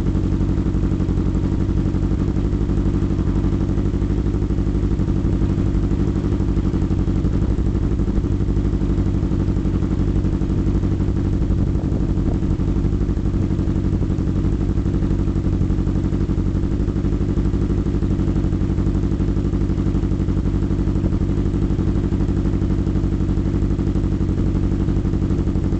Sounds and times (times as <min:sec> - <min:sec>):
Wind noise (microphone): 0:11.2 - 0:14.2.